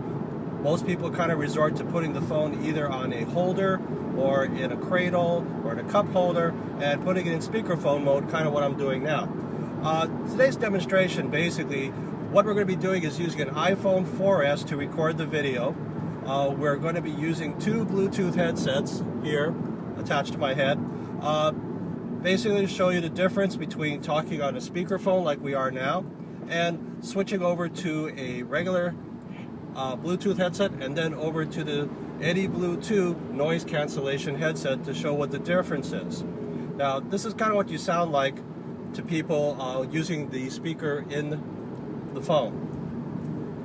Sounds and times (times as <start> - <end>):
Speech: 0.6 - 21.6, 22.2 - 29.0, 29.8 - 38.4, 39.0 - 41.4, 42.2 - 42.6.